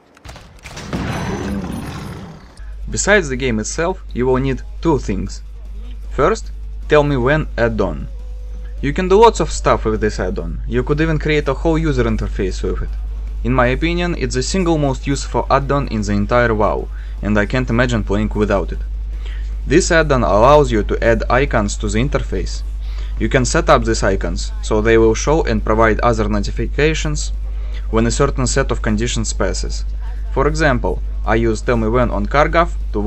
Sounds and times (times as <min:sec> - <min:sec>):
Speech: 0:02.9 - 0:08.1, 0:08.8 - 0:18.8, 0:19.7 - 0:22.6, 0:23.2 - 0:33.0.